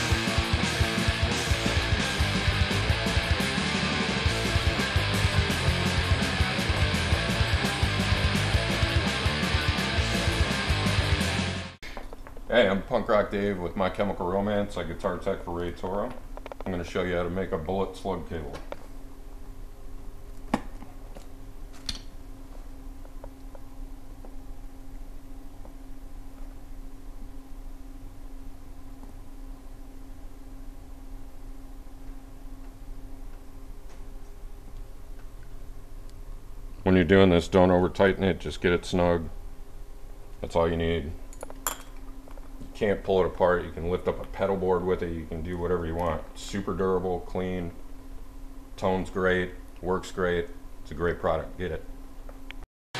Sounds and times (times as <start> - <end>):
Speech: 12.5 - 18.7, 36.8 - 39.4, 40.4 - 41.2, 42.7 - 47.8, 48.8 - 51.9.